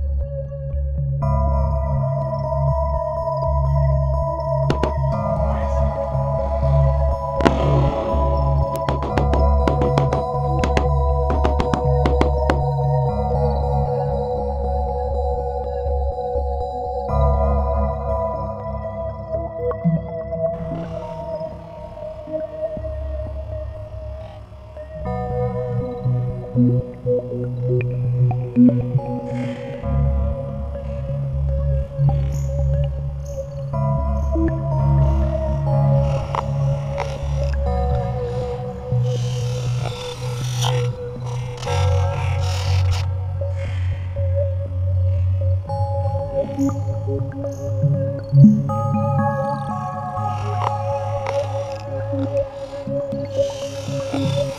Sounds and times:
Synthesizer: 0:00.0 - 0:54.5.

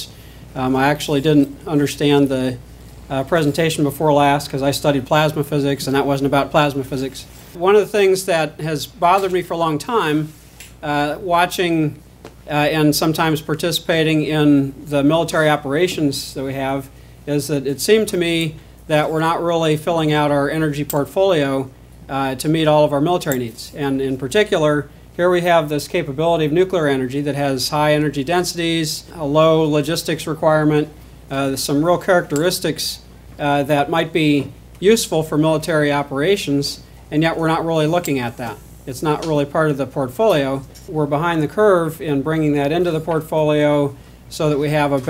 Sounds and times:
Speech: 0:00.0 - 0:45.0.

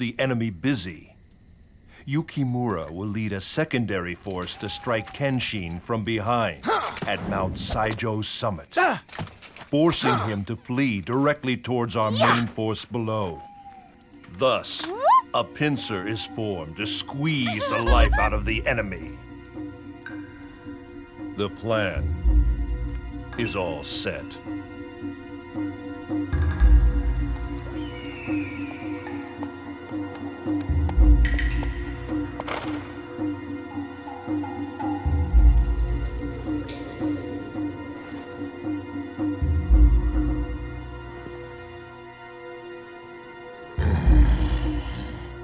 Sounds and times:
Speech: 0:02.1 - 0:09.0, 0:09.7 - 0:13.4, 0:14.4 - 0:19.1, 0:21.4 - 0:22.0, 0:23.4 - 0:24.4
Music: 0:02.1 - 0:09.2, 0:09.8 - 0:45.4.

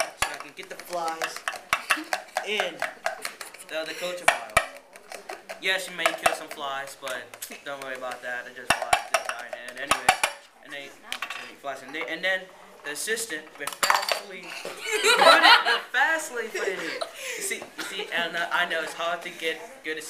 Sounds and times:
Laughter: 0:14.8 - 0:15.9.

